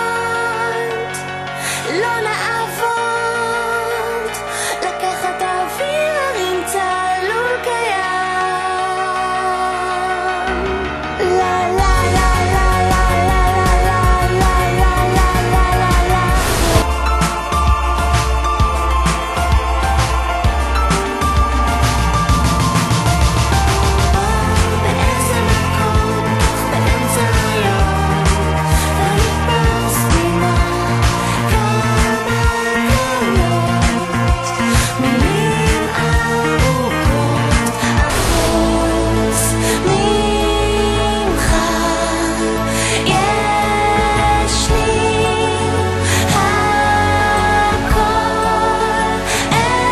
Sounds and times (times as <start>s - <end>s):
Music: 0.0s - 49.9s.